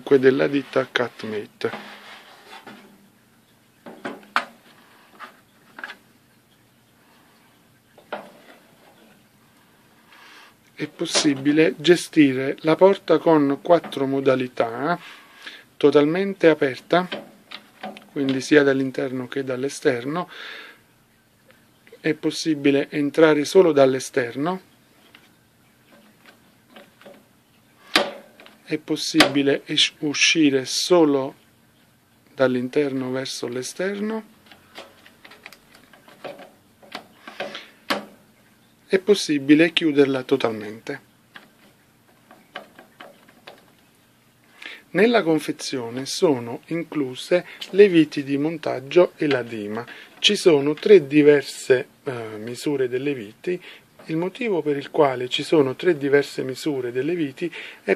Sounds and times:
Speech: 0:00.0 - 0:01.9, 0:10.8 - 0:15.0, 0:15.8 - 0:17.2, 0:18.1 - 0:20.3, 0:22.0 - 0:24.7, 0:28.6 - 0:31.4, 0:32.4 - 0:34.3, 0:38.9 - 0:41.0, 0:44.9 - 0:57.9.

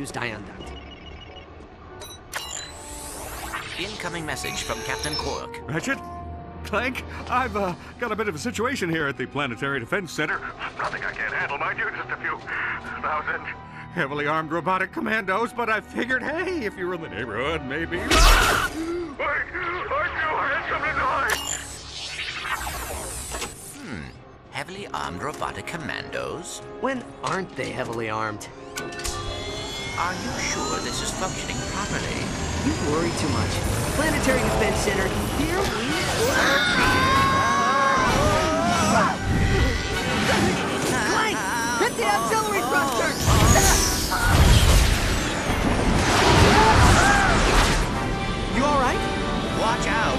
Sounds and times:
Music: 0:00.0 - 0:50.1.

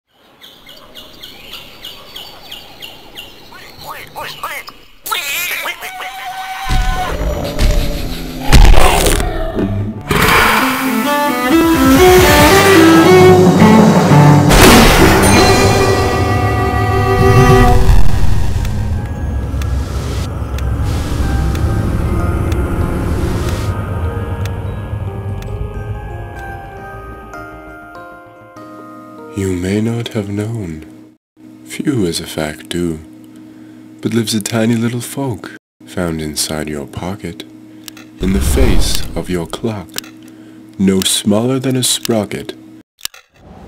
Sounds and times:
Chirp, tweet: 0:00.1 - 0:05.0.

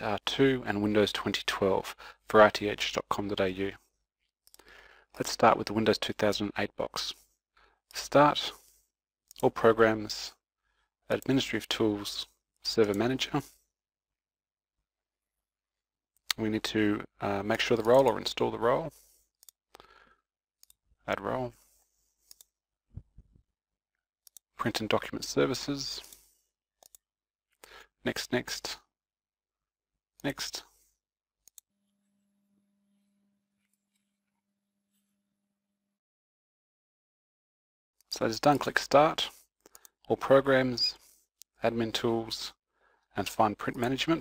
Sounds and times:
Speech: 0:00.0 - 0:03.8, 0:05.2 - 0:07.2, 0:08.0 - 0:08.6, 0:09.4 - 0:10.4, 0:11.1 - 0:13.5, 0:16.3 - 0:19.0, 0:21.1 - 0:21.6, 0:24.6 - 0:26.2, 0:28.0 - 0:28.9, 0:30.2 - 0:30.7, 0:38.1 - 0:39.4, 0:40.1 - 0:41.0, 0:41.6 - 0:42.6, 0:43.2 - 0:44.2.

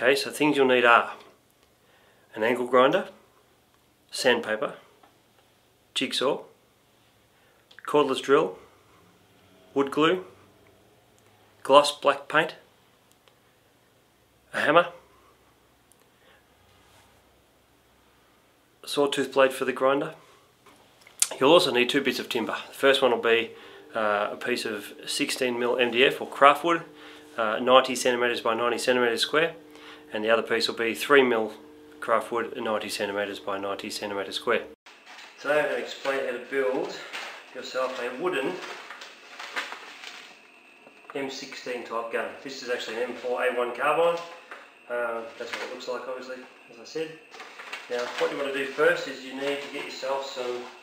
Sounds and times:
Speech: 0:00.0 - 0:01.4, 0:02.3 - 0:03.2, 0:04.1 - 0:04.9, 0:06.0 - 0:06.6, 0:07.8 - 0:08.7, 0:09.7 - 0:10.4, 0:11.6 - 0:12.7, 0:14.5 - 0:15.0, 0:18.8 - 0:20.2, 0:21.2 - 0:34.8, 0:35.4 - 0:38.8, 0:41.1 - 0:47.2, 0:47.9 - 0:50.8.

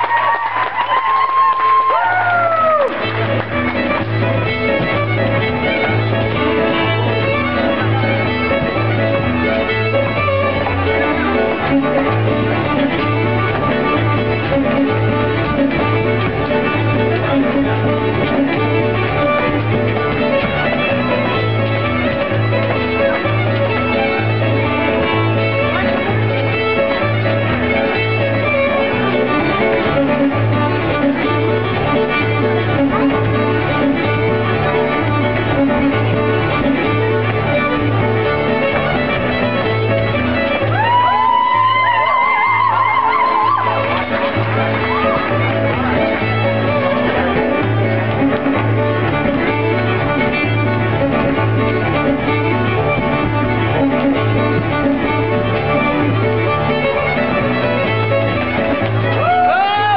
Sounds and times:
Violin, fiddle: 0:01.7 - 0:59.9.

